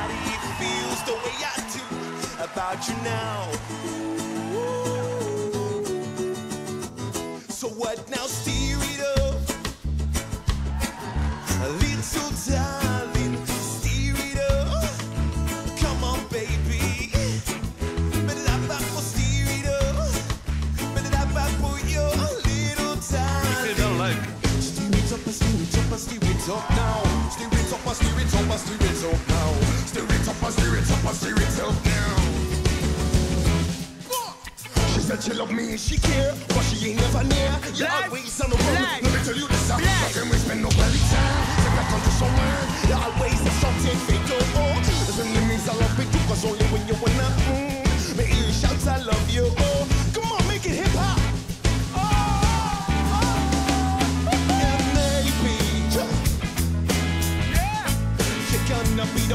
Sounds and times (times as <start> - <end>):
Music: 0.0 - 59.3.